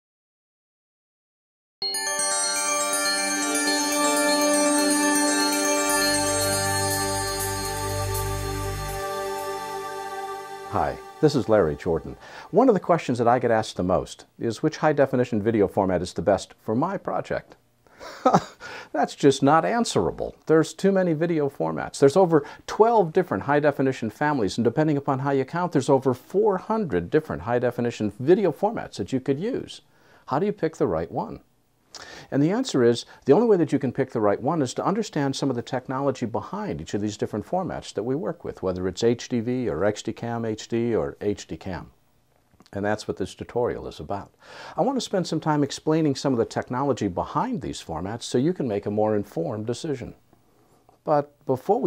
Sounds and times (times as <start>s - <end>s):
Glockenspiel: 1.8s - 12.2s.